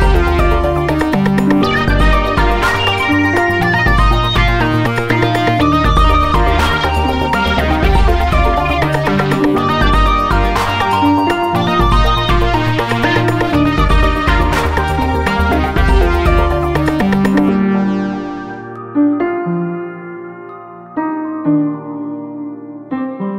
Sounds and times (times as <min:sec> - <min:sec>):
Synthesizer: 0:00.0 - 0:23.3.